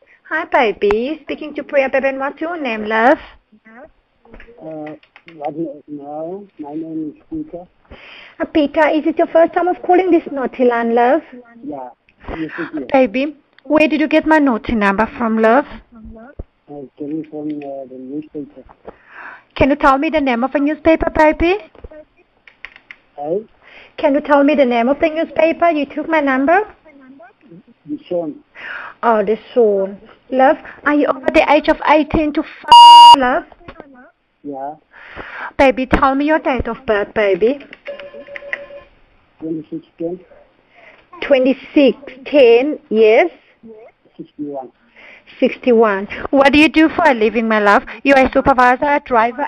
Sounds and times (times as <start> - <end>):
Speech: 0.4 - 7.7, 8.7 - 18.7, 23.2 - 28.4, 39.4 - 40.3, 43.7 - 44.7.